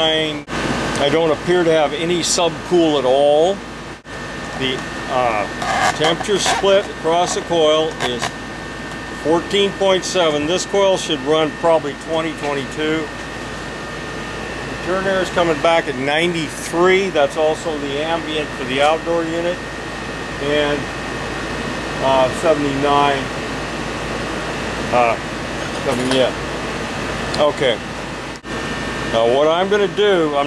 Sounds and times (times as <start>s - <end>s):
Speech: 0.0s - 3.6s, 4.6s - 8.3s, 9.2s - 13.1s, 14.8s - 19.6s, 20.4s - 20.9s, 22.0s - 23.3s, 24.9s - 25.2s, 25.8s - 26.4s, 27.4s - 27.8s, 29.1s - 30.4s.